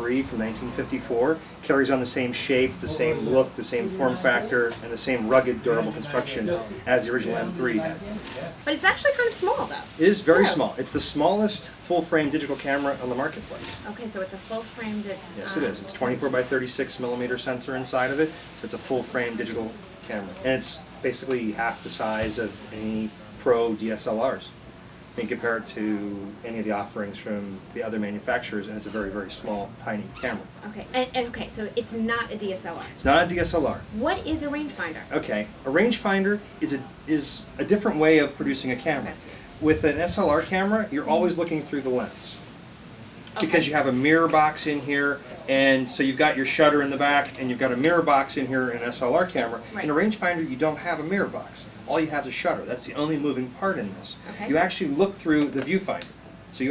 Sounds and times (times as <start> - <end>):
Speech: 0.0 - 8.4, 9.4 - 14.0, 14.7 - 24.5, 43.4 - 56.0.